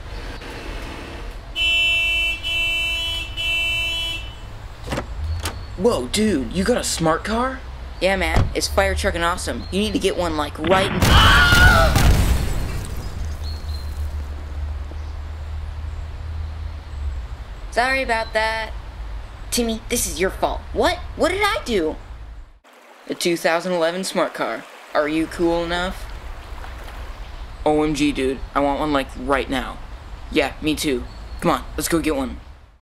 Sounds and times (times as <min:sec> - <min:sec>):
Speech: 0:05.8 - 0:11.0, 0:17.7 - 0:18.8, 0:19.5 - 0:22.0, 0:23.1 - 0:26.0, 0:27.7 - 0:32.4.